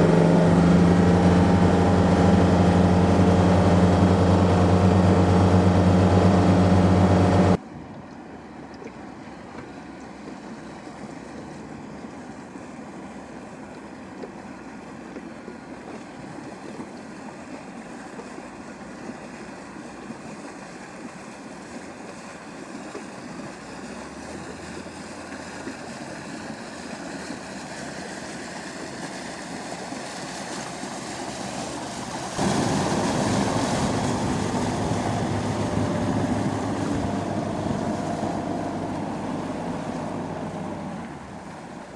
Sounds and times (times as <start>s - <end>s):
Boat, Water vehicle: 0.0s - 41.9s.